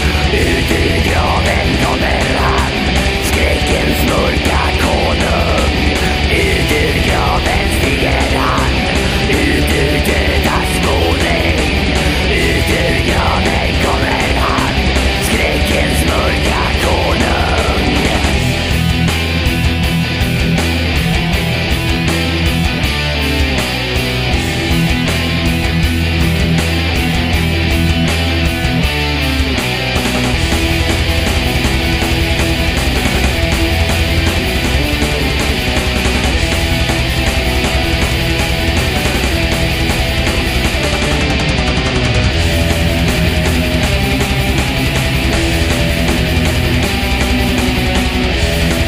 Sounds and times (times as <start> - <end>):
Heavy metal: 0.0 - 48.8.